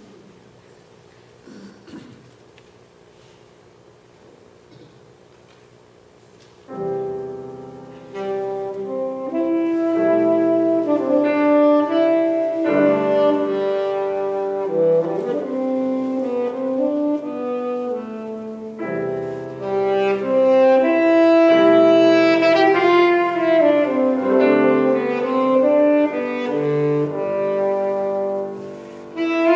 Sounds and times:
Jazz: 0:05.3 - 0:29.5
Piano: 0:06.2 - 0:29.5
Classical music: 0:06.7 - 0:29.5
Orchestra: 0:06.8 - 0:29.5
Saxophone: 0:07.0 - 0:29.5.

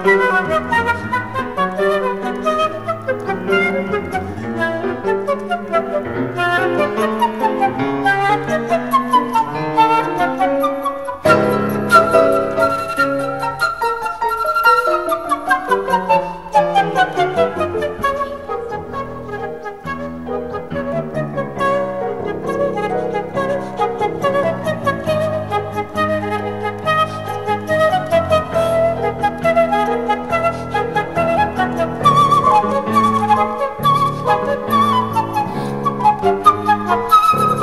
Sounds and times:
Classical music: 0:00.0 - 0:37.6
Flute: 0:00.0 - 0:37.6
Piano: 0:00.0 - 0:37.6.

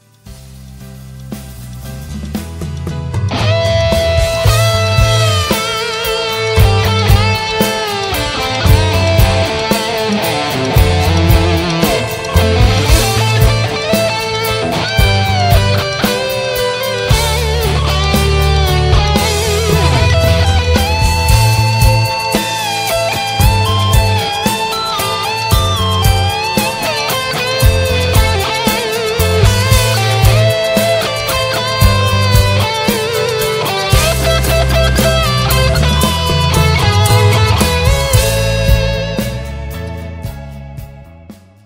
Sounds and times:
Electric guitar: 0:00.0 - 0:41.6.

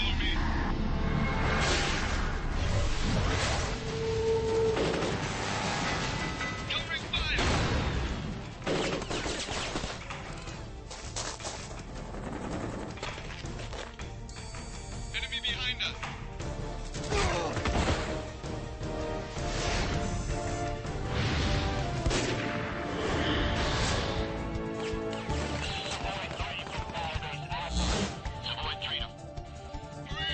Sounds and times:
Music: 0:00.0 - 0:30.3.

